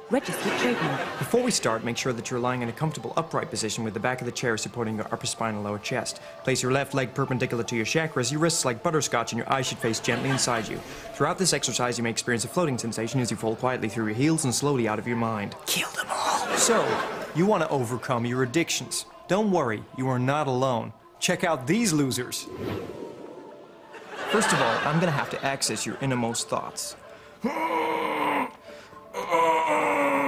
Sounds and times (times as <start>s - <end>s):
Speech: 0.1s - 22.5s, 24.3s - 27.0s.